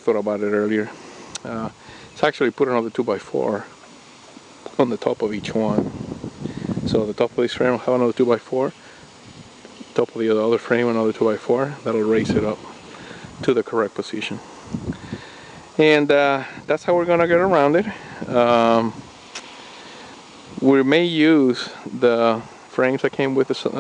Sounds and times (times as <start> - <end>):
Speech: 0.0 - 3.8, 4.7 - 5.9, 6.9 - 8.8, 9.9 - 12.7, 13.4 - 14.4, 15.8 - 19.0, 20.6 - 23.8
Outside, rural or natural: 0.0 - 23.8.